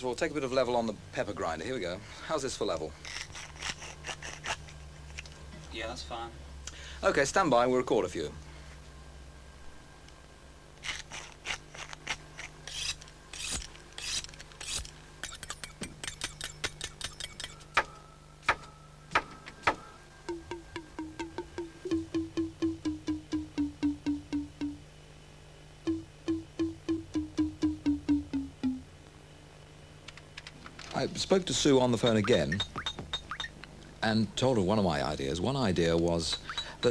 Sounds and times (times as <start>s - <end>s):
Speech: 0.0s - 2.9s, 5.7s - 6.4s, 7.0s - 8.4s, 30.9s - 32.6s, 34.0s - 36.9s
Music: 17.6s - 24.9s, 25.9s - 28.9s.